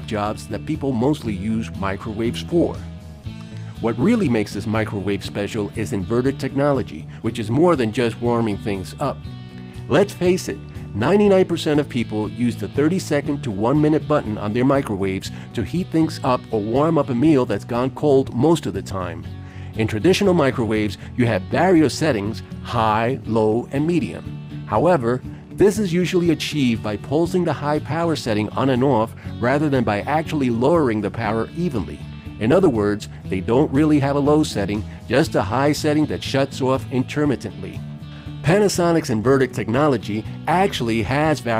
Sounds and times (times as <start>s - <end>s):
Speech: 0.0s - 2.8s, 3.8s - 9.2s, 9.9s - 37.8s, 38.4s - 41.5s
Music: 0.0s - 41.5s.